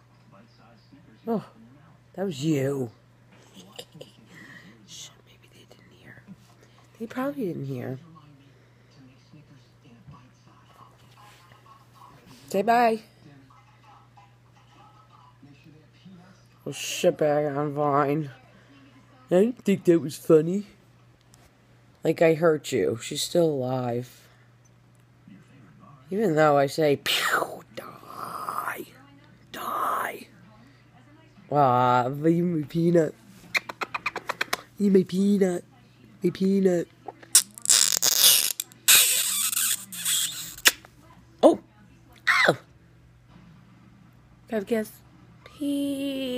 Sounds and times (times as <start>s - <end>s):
Inside, small room: 0.0s - 46.3s.